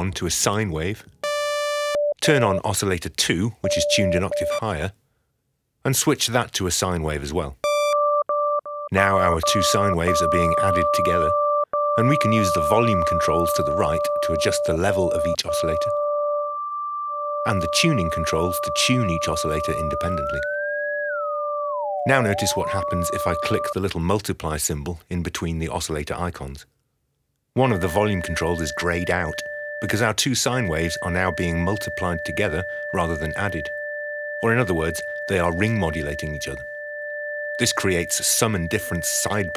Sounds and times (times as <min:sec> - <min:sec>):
Speech: 0:00.0 - 0:01.1, 0:02.2 - 0:05.0, 0:05.8 - 0:07.6, 0:09.0 - 0:11.4, 0:12.0 - 0:15.9, 0:17.5 - 0:20.5, 0:22.1 - 0:26.7, 0:27.6 - 0:33.7, 0:34.4 - 0:36.6, 0:37.6 - 0:39.5.